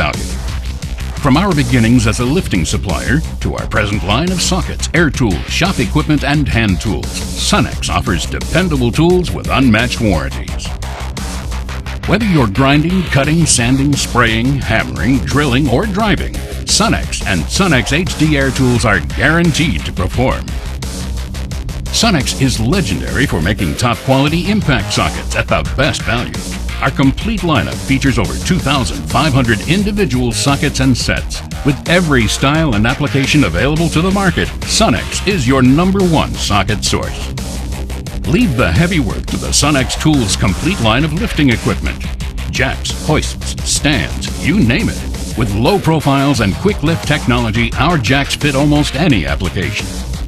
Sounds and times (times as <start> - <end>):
Speech: 0.0 - 0.4, 1.2 - 10.7, 12.0 - 20.5, 21.9 - 37.3, 38.3 - 49.9
Music: 0.0 - 50.2.